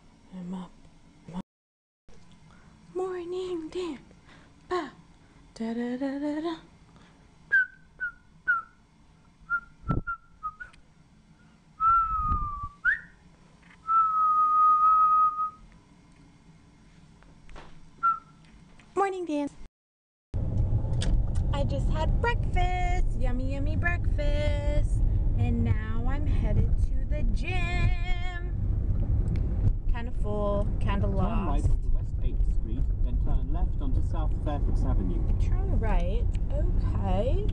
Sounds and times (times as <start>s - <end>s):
Whistling: 7.5s - 8.8s, 9.5s - 10.8s, 11.8s - 13.2s, 13.8s - 15.6s, 18.0s - 18.4s.